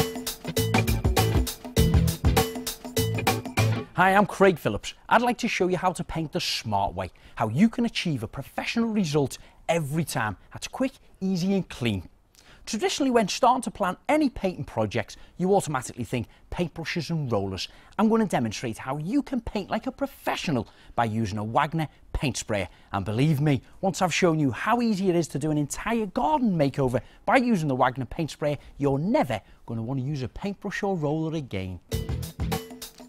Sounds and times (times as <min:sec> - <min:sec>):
Speech: 0:04.0 - 0:12.1, 0:12.7 - 0:31.8.